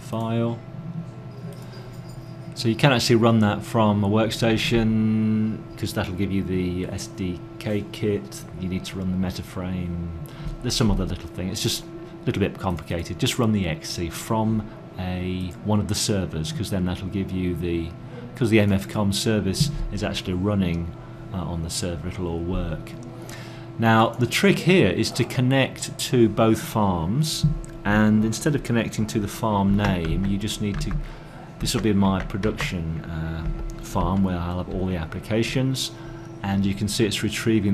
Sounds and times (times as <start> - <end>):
Speech: 0.0 - 0.7, 2.6 - 23.1, 23.8 - 37.7.